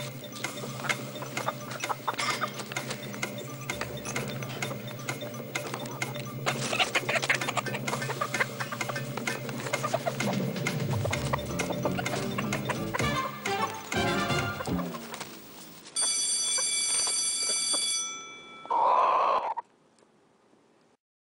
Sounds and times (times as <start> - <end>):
Cluck: 5.6 - 13.0.